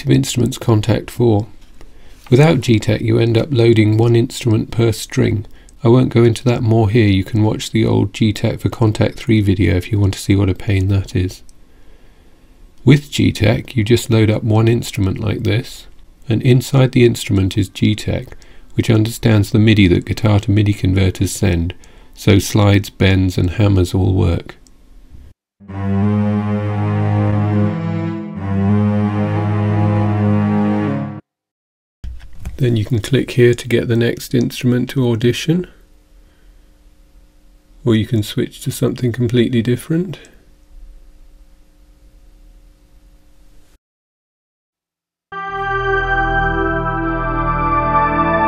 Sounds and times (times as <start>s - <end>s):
Speech: 0.0s - 1.6s, 2.3s - 11.5s, 12.8s - 24.6s, 32.6s - 35.8s, 37.8s - 40.4s
Strum: 25.6s - 31.1s, 45.4s - 48.4s.